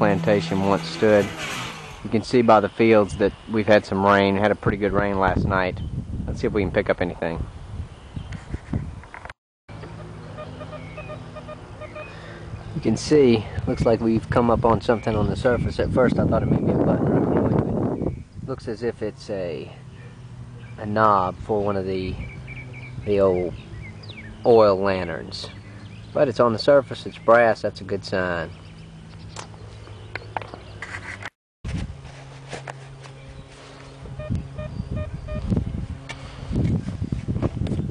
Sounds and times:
Speech: 0.0 - 1.3, 2.1 - 7.5, 12.8 - 17.7, 18.5 - 19.8, 20.8 - 22.2, 23.1 - 23.6, 24.4 - 25.6, 26.2 - 28.5.

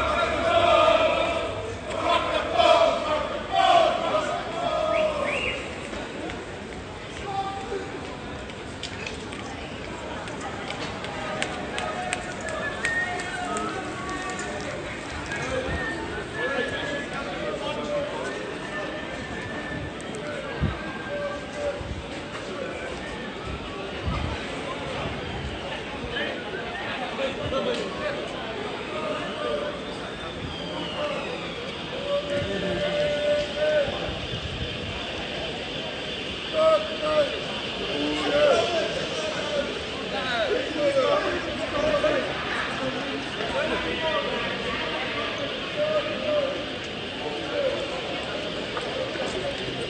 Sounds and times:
Speech: 0.0 - 49.8.

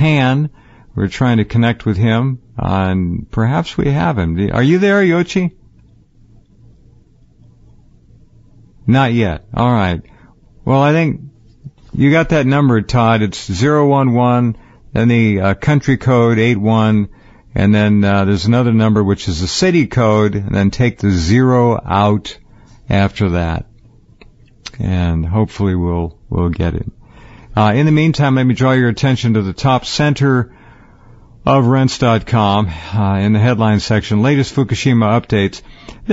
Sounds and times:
Speech: 0.0 - 5.6, 8.9 - 10.1, 10.7 - 11.3, 11.9 - 23.7, 24.7 - 27.0, 27.6 - 30.5, 31.4 - 36.1.

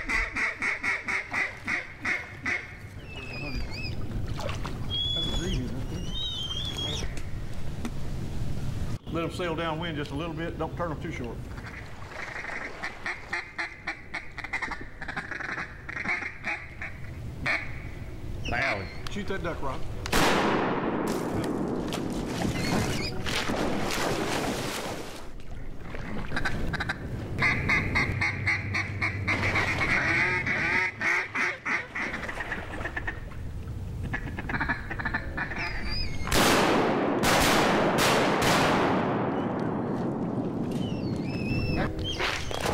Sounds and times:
Quack: 0.0 - 2.7, 11.6 - 17.9, 26.3 - 33.2, 34.1 - 35.8.

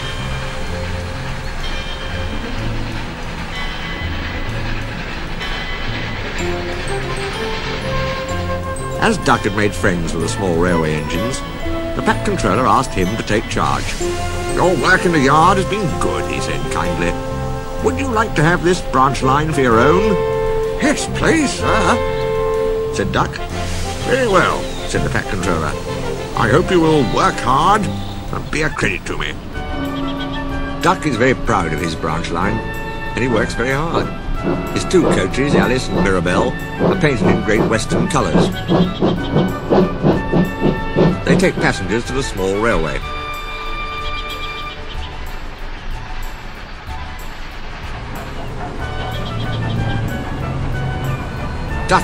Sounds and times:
Music: 0.0 - 52.0
Speech: 9.0 - 11.4, 12.0 - 14.0, 14.6 - 17.2, 17.8 - 20.2, 20.8 - 22.0, 22.9 - 23.4, 24.0 - 25.8, 26.4 - 29.4, 30.8 - 32.6, 33.2 - 34.1, 34.8 - 38.6, 41.3 - 43.1.

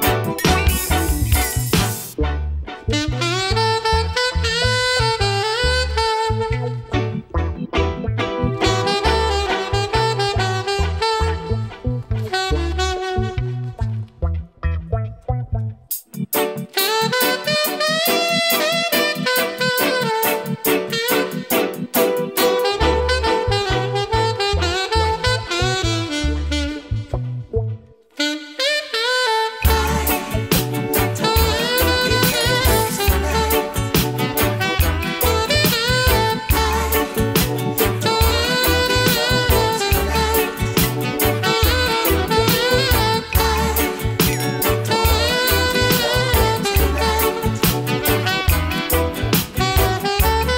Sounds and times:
Music: 0.0 - 50.5.

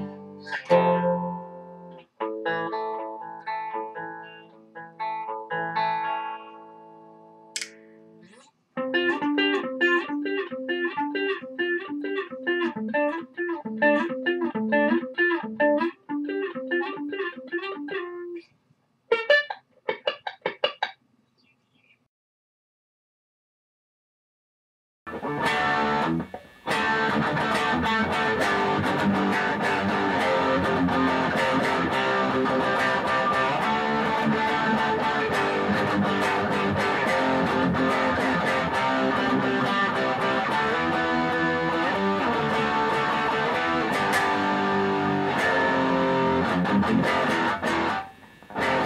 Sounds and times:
Electronic tuner: 0.0 - 18.5, 19.1 - 20.8, 25.1 - 48.8
Inside, small room: 0.0 - 22.1, 25.1 - 48.8.

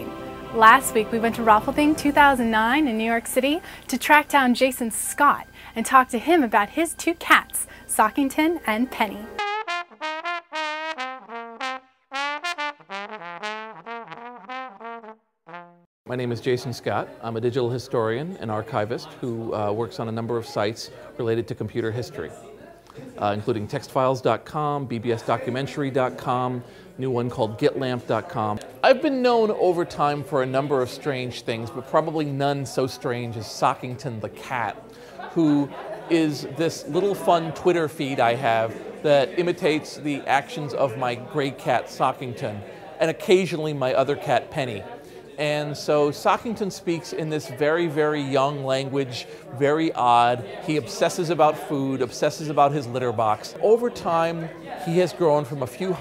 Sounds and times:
Speech: 0.6 - 9.4, 16.1 - 56.0.

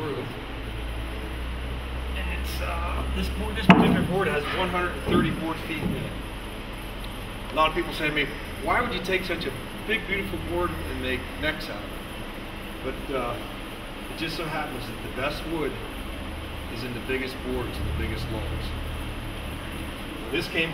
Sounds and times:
Speech: 2.2 - 6.2, 7.5 - 11.9, 12.8 - 13.5, 14.2 - 15.8, 16.7 - 18.8, 20.3 - 20.7.

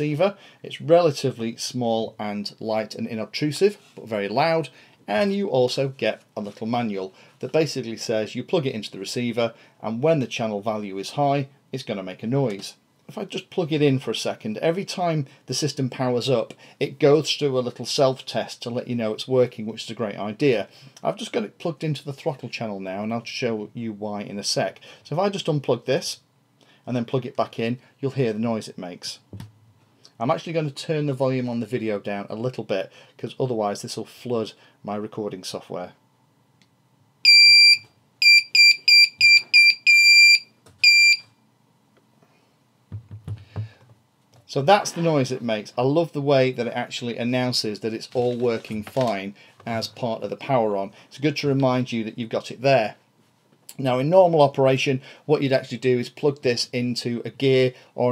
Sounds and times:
Speech: 0.0 - 26.3, 26.9 - 29.3, 30.2 - 36.0, 44.4 - 53.0, 53.7 - 58.1.

